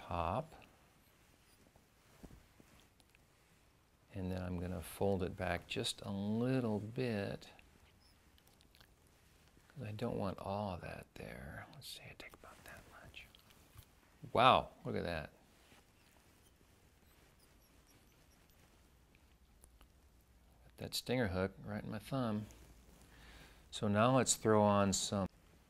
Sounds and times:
Speech: 0:00.0 - 0:00.6, 0:04.1 - 0:07.6, 0:09.8 - 0:13.3, 0:14.2 - 0:15.4, 0:20.6 - 0:22.5, 0:23.7 - 0:25.3
Whispering: 0:11.4 - 0:13.7.

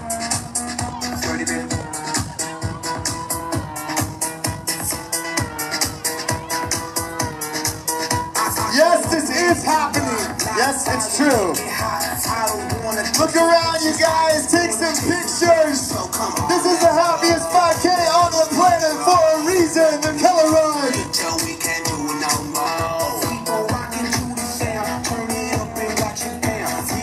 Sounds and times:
Music: 0:00.0 - 0:27.0
Speech: 0:08.7 - 0:11.6, 0:13.1 - 0:15.9, 0:16.5 - 0:21.0.

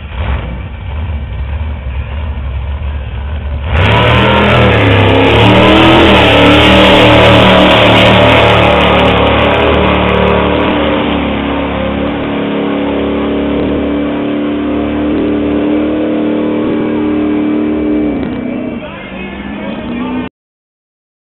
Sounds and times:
Vehicle: 0:00.0 - 0:20.3
Speech: 0:18.5 - 0:20.3.

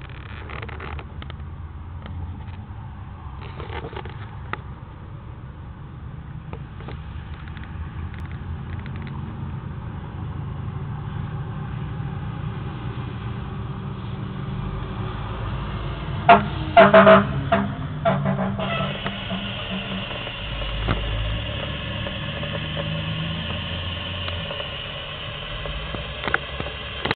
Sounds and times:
Vehicle: 0:00.0 - 0:27.1.

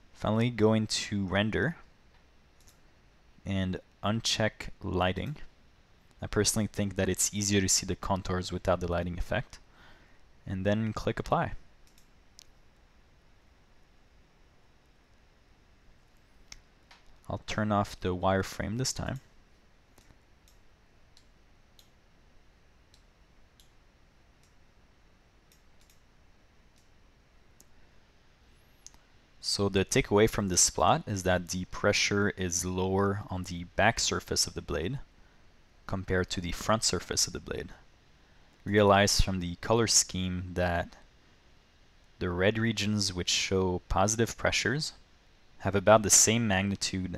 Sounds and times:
Speech: 0:00.2 - 0:01.9, 0:03.4 - 0:05.5, 0:06.2 - 0:09.6, 0:10.4 - 0:11.6, 0:17.3 - 0:19.3, 0:29.4 - 0:35.1, 0:35.9 - 0:37.9, 0:38.6 - 0:41.1, 0:42.2 - 0:45.0, 0:45.6 - 0:47.1.

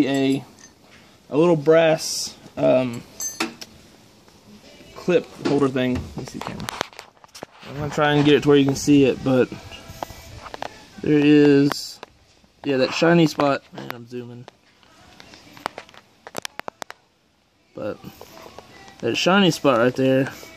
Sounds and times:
Music: 0:01.7 - 0:20.5
Speech: 0:07.7 - 0:09.6, 0:11.0 - 0:12.0, 0:12.6 - 0:14.5, 0:19.0 - 0:20.4.

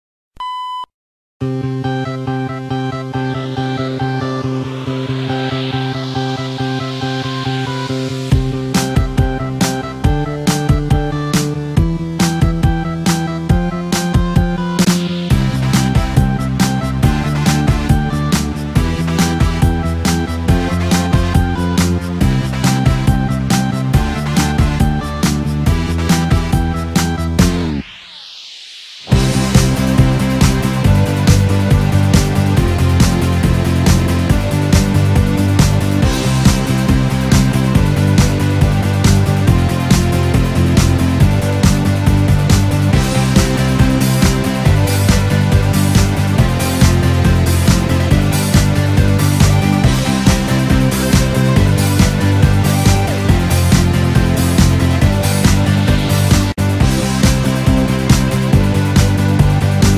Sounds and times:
Music: 0:01.4 - 0:59.9.

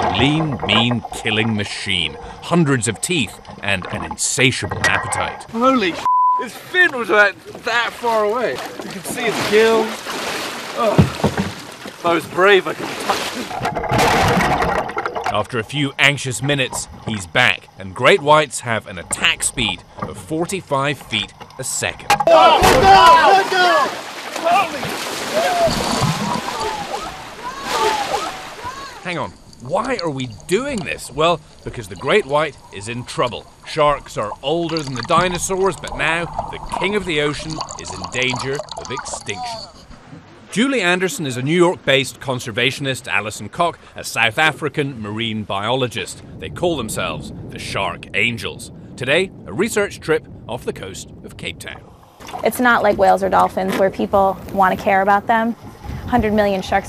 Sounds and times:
Speech: 0:00.0 - 0:09.9, 0:15.3 - 0:24.8, 0:29.0 - 0:39.7, 0:40.6 - 0:51.8, 0:52.4 - 0:56.8.

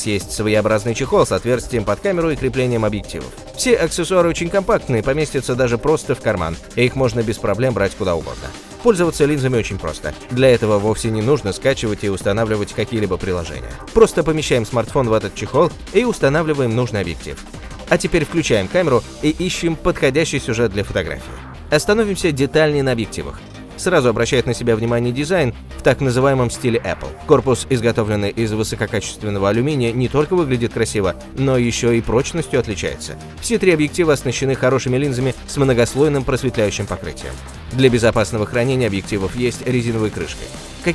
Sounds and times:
Music: 0:00.0 - 0:40.9
Speech: 0:00.0 - 0:40.9.

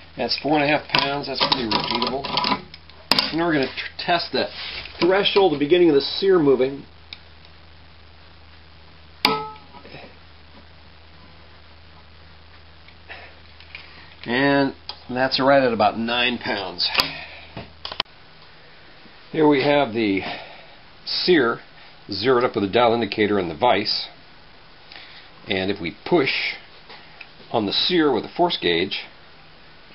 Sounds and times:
Inside, small room: 0:00.0 - 0:29.9
Speech: 0:00.2 - 0:02.4, 0:03.3 - 0:06.9, 0:14.3 - 0:17.1, 0:19.3 - 0:20.4, 0:21.1 - 0:24.2, 0:25.5 - 0:26.7, 0:27.5 - 0:29.2.

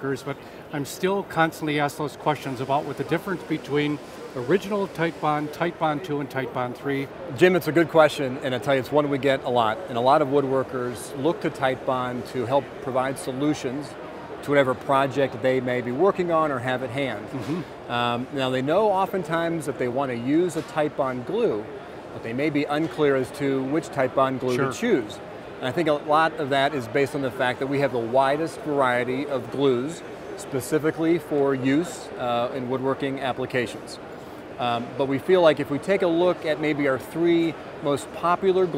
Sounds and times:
Speech: 0:00.0 - 0:34.0.

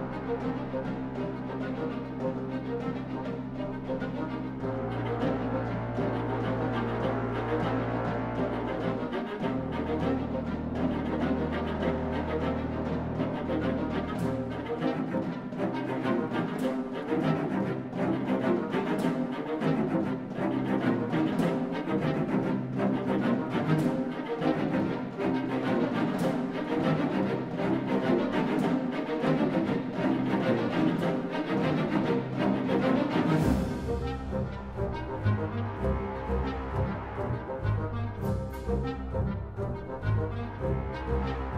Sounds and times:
Music: 0:00.0 - 0:41.5.

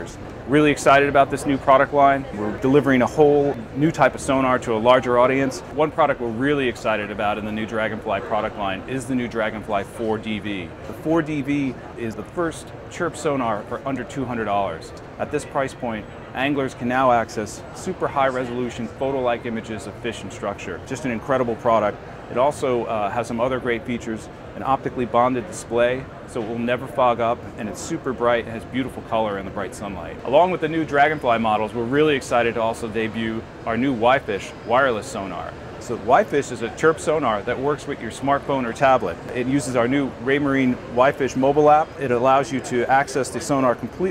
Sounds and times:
Speech: 0:00.0 - 0:44.1.

